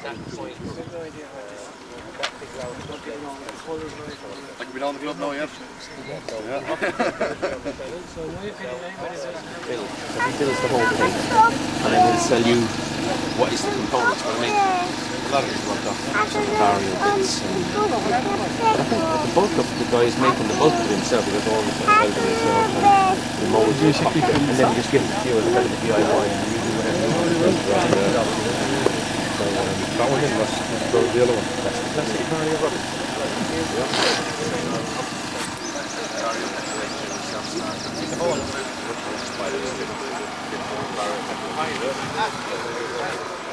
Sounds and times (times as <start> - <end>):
Speech: 7.8 - 43.5.